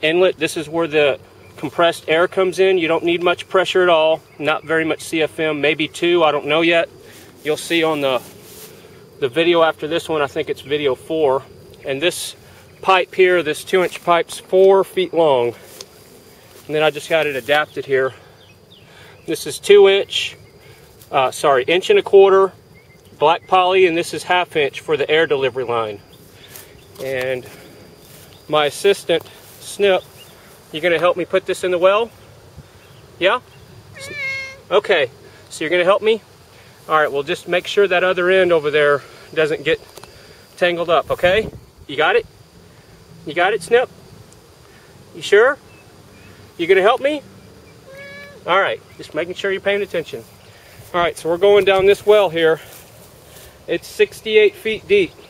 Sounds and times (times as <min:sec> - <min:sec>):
Speech: 0:00.0 - 0:08.3, 0:09.2 - 0:15.6, 0:16.7 - 0:18.2, 0:19.3 - 0:20.4, 0:21.1 - 0:22.6, 0:23.2 - 0:26.0, 0:27.0 - 0:27.5, 0:28.5 - 0:30.1, 0:30.7 - 0:32.1, 0:33.2 - 0:33.4, 0:34.0 - 0:36.2, 0:36.9 - 0:39.8, 0:40.6 - 0:42.3, 0:43.3 - 0:43.9, 0:45.2 - 0:45.6, 0:46.6 - 0:47.2, 0:48.4 - 0:50.3, 0:50.9 - 0:52.6, 0:53.7 - 0:55.2.